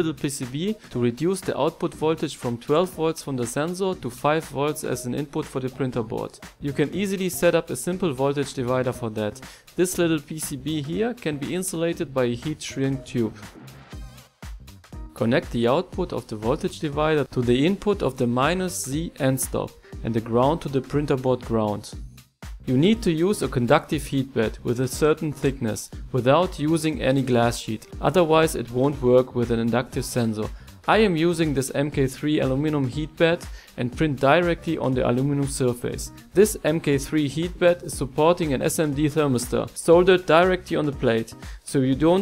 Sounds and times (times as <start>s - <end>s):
Speech: 0.0s - 13.5s, 15.2s - 22.0s, 22.7s - 42.2s
Music: 0.0s - 42.2s.